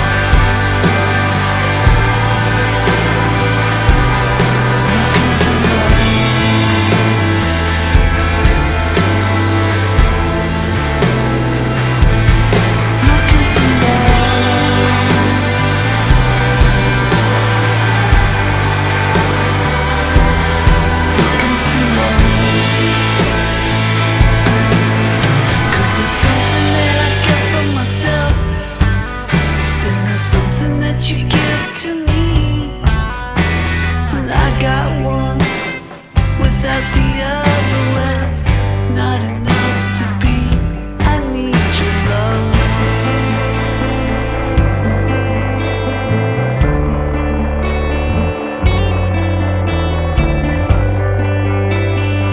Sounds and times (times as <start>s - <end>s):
Grunge: 0.0s - 52.3s.